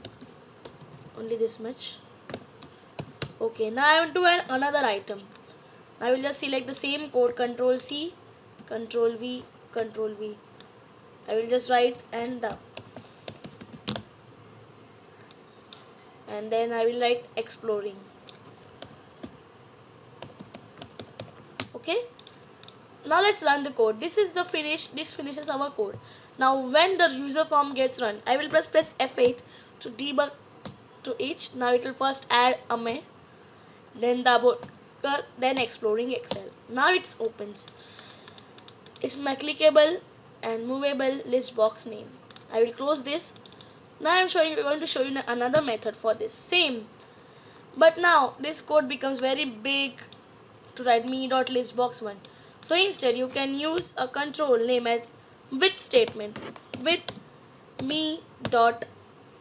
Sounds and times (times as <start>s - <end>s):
Computer keyboard: 0.0s - 1.2s, 12.4s - 14.1s, 20.2s - 22.8s.